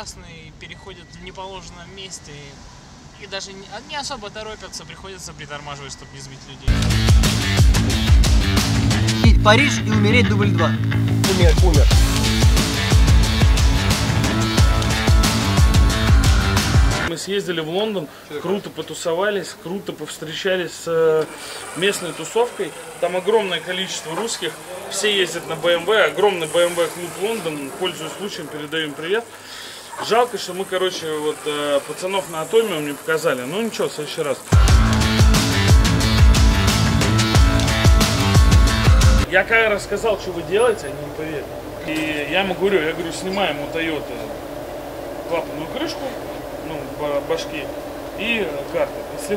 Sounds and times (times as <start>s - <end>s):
Speech: 0.0s - 2.6s, 9.3s - 12.0s, 17.1s - 29.3s, 30.0s - 34.5s, 39.3s - 44.3s, 45.3s - 49.3s
Music: 6.7s - 17.1s, 34.5s - 39.3s.